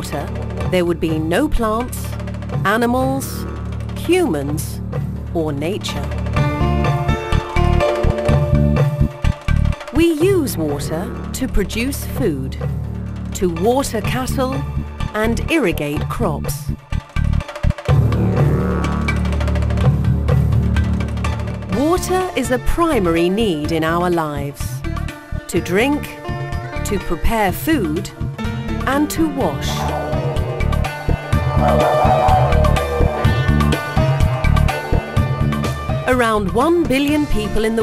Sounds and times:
Speech: 0:00.0 - 0:06.1, 0:10.0 - 0:12.6, 0:13.4 - 0:16.7, 0:21.8 - 0:24.8, 0:25.5 - 0:26.2, 0:26.9 - 0:28.1, 0:28.9 - 0:29.8, 0:36.1 - 0:37.8
Music: 0:00.0 - 0:37.8.

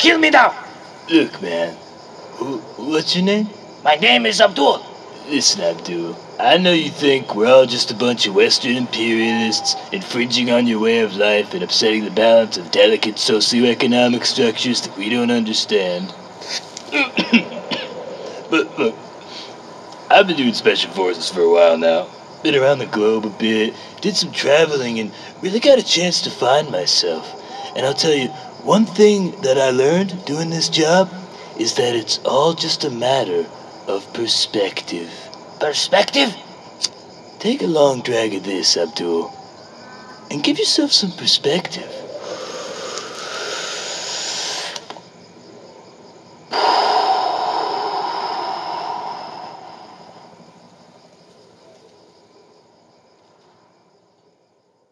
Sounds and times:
Speech: 0:00.0 - 0:01.8, 0:02.4 - 0:19.5, 0:20.1 - 0:39.4, 0:40.3 - 0:42.1.

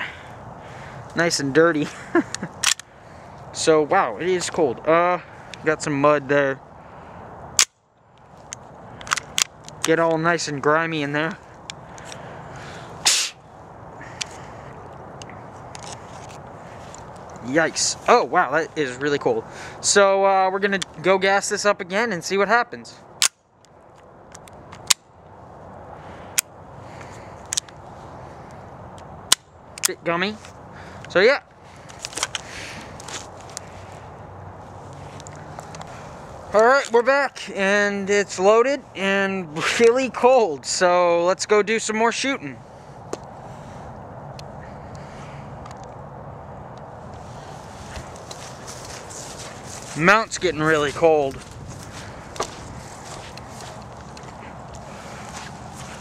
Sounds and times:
Outside, urban or manmade: 0:00.0 - 0:56.0
Speech: 0:03.6 - 0:06.6, 0:17.4 - 0:23.0, 0:36.6 - 0:42.6, 0:50.0 - 0:51.4.

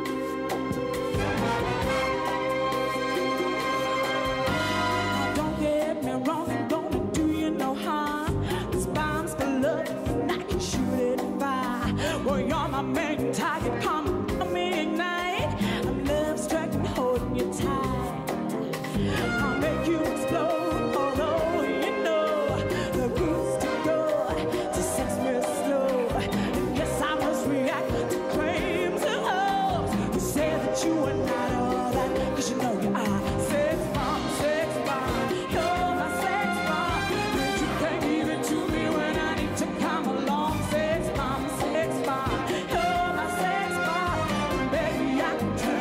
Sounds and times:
Pop music: 0:00.0 - 0:45.8.

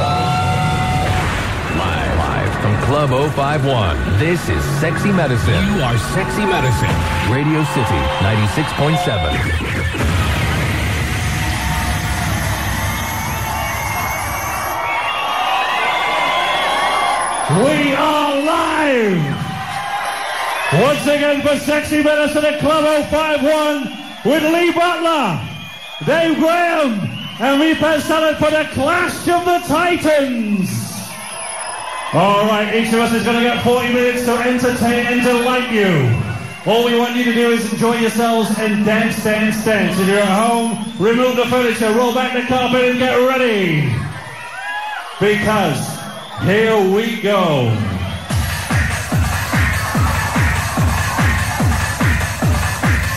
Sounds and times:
Speech: 0:01.7 - 0:09.7, 0:17.5 - 0:19.4, 0:20.7 - 0:25.4, 0:26.0 - 0:31.1, 0:32.1 - 0:44.0, 0:45.2 - 0:47.8.

